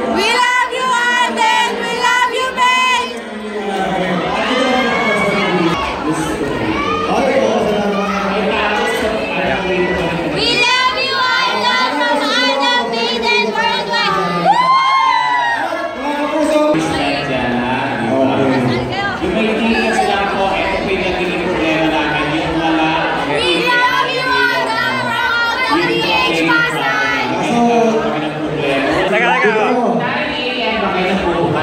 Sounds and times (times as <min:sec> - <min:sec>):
Crowd: 0:00.0 - 0:31.6.